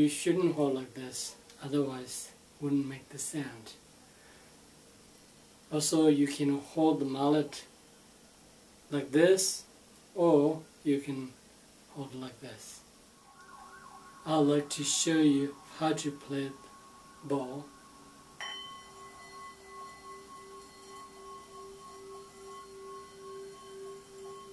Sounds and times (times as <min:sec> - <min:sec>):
Speech: 0:00.0 - 0:03.8, 0:05.7 - 0:07.7, 0:08.9 - 0:12.9, 0:14.2 - 0:16.6, 0:17.2 - 0:17.7.